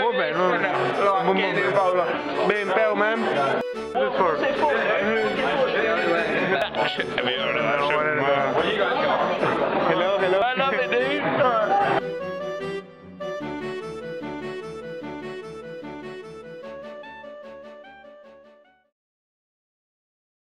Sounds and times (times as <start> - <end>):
Speech: 0.0 - 12.0
Music: 0.0 - 18.9.